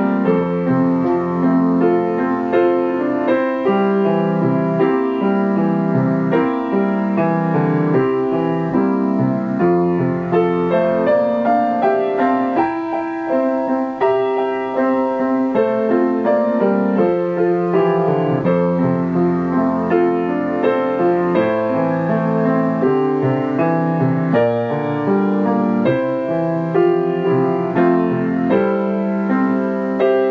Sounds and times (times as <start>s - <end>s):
Christmas music: 0.0s - 30.3s.